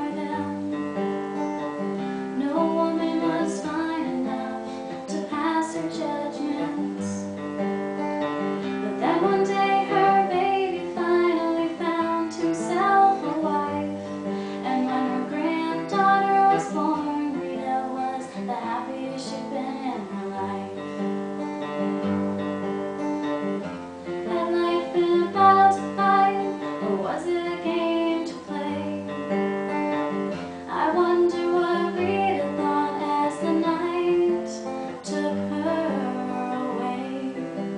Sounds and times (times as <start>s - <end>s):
Female singing: 0.0s - 0.7s, 2.4s - 7.4s, 8.9s - 14.0s, 14.6s - 20.9s, 24.2s - 29.2s, 30.7s - 37.7s
Music: 0.0s - 37.7s.